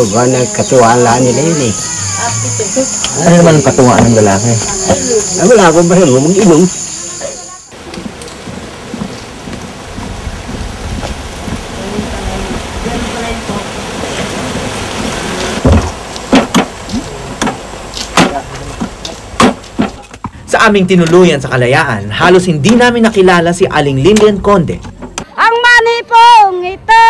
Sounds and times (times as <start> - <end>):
Outside, rural or natural: 0.0 - 27.0.